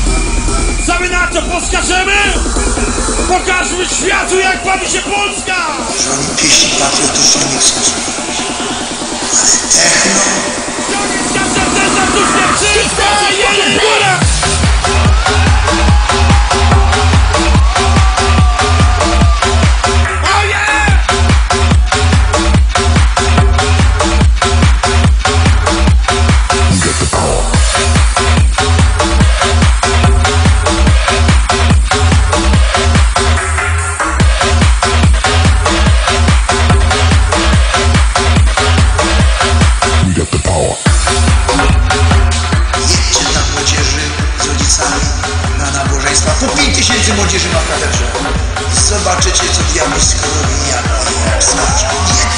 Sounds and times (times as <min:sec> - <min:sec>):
Techno: 0:00.0 - 0:52.3.